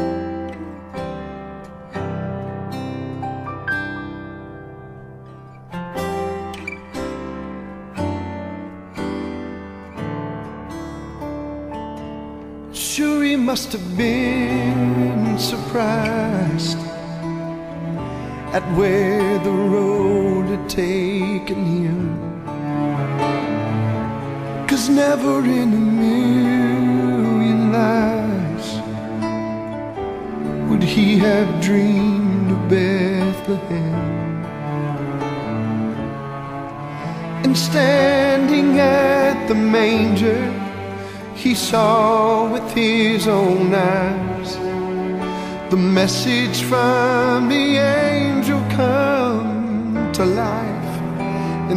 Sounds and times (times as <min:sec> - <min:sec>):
Music: 0:00.0 - 0:51.7
Male singing: 0:12.7 - 0:17.3, 0:18.4 - 0:22.5, 0:24.6 - 0:29.0, 0:30.6 - 0:34.3, 0:37.4 - 0:44.9, 0:45.6 - 0:51.7.